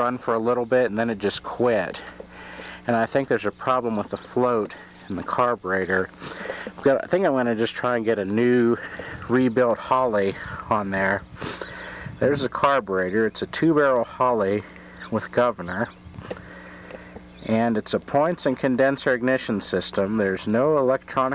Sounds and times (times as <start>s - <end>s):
Speech: 0.0s - 2.1s, 2.9s - 6.1s, 6.8s - 11.2s, 12.2s - 15.9s, 17.4s - 21.3s.